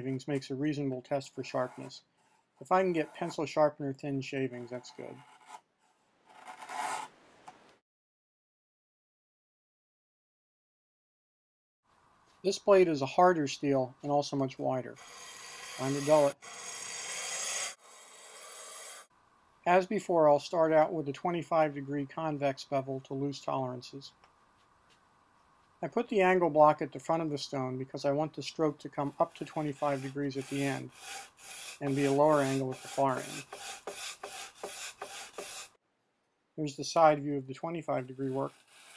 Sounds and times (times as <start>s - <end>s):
Filing (rasp): 1.5s - 3.4s, 4.8s - 5.6s, 15.0s - 19.1s, 29.0s - 35.8s, 38.4s - 38.9s.